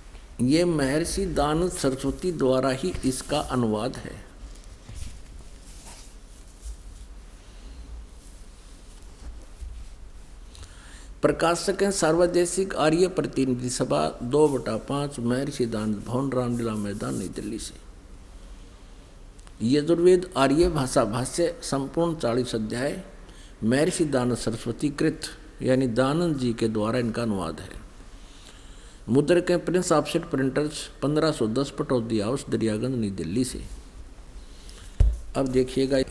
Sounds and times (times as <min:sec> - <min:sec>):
Speech: 0:00.4 - 0:04.3, 0:11.2 - 0:17.8, 0:19.6 - 0:27.9, 0:29.1 - 0:33.8, 0:35.4 - 0:36.1.